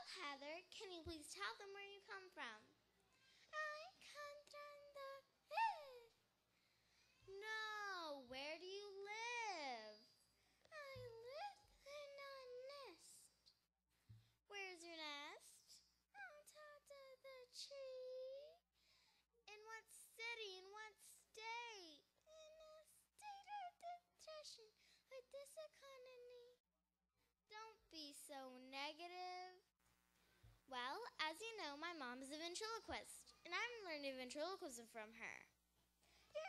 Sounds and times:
Child speech, kid speaking: 0.0 - 6.2, 7.2 - 10.2, 10.8 - 13.4, 14.5 - 18.6, 19.5 - 26.6, 27.5 - 29.7, 30.7 - 35.5.

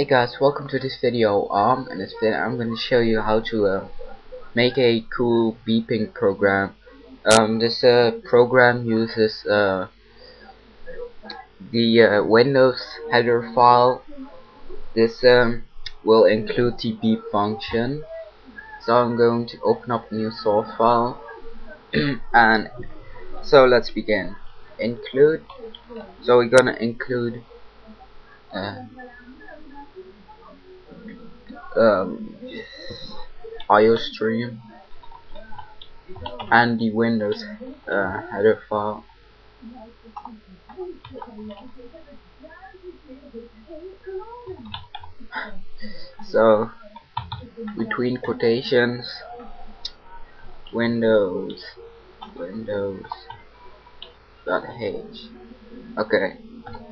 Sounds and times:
Speech: 0.0 - 56.9.

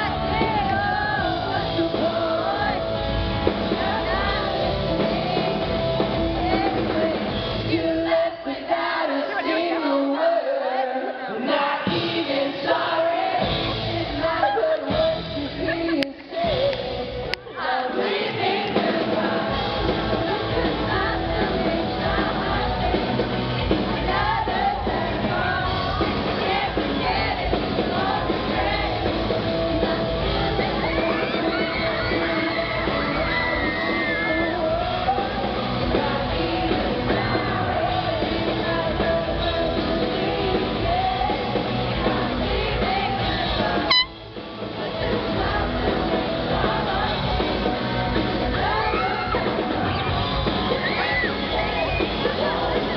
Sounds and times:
Inside, large room or hall: 0.0 - 52.9
Pop music: 0.0 - 52.9
Singing: 0.0 - 52.9.

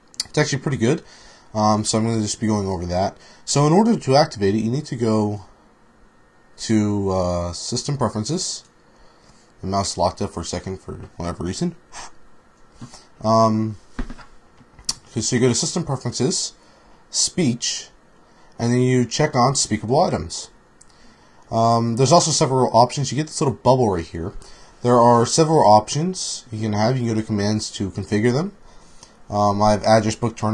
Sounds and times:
Narration, monologue: 0.0 - 30.5
Male speech, man speaking: 0.2 - 1.0, 1.6 - 5.5, 6.6 - 8.7, 9.6 - 11.8, 13.2 - 13.8, 15.1 - 18.0, 18.6 - 20.5, 21.5 - 28.6, 29.3 - 30.5.

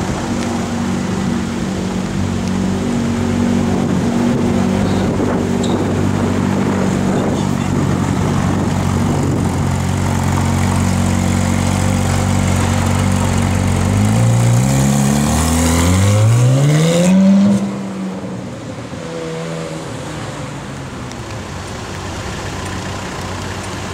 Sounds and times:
Car: 0.0 - 23.9
Traffic noise, roadway noise: 0.0 - 23.9.

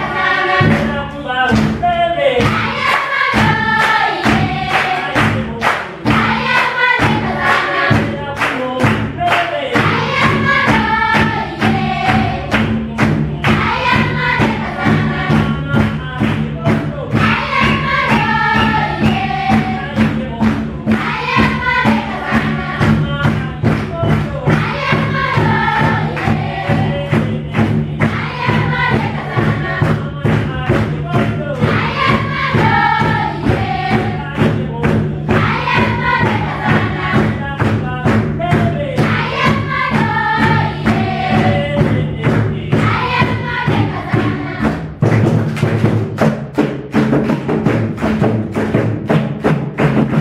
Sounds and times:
Choir: 0.0 - 45.2
Male singing: 0.6 - 2.5, 8.0 - 9.9, 15.3 - 17.2, 19.7 - 20.9, 22.8 - 24.7, 26.6 - 28.2, 29.6 - 31.7, 33.9 - 35.3, 36.9 - 39.1, 41.3 - 42.9
Child singing: 9.8 - 12.6, 17.2 - 44.8.

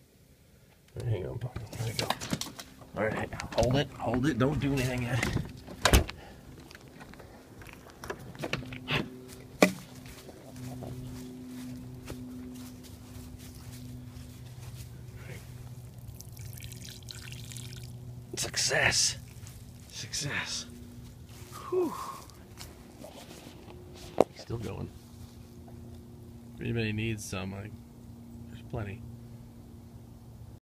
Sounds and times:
Speech: 1.0 - 2.2, 3.0 - 5.4, 18.4 - 19.2, 19.9 - 20.7, 24.4 - 24.9, 26.6 - 27.8, 28.5 - 29.0.

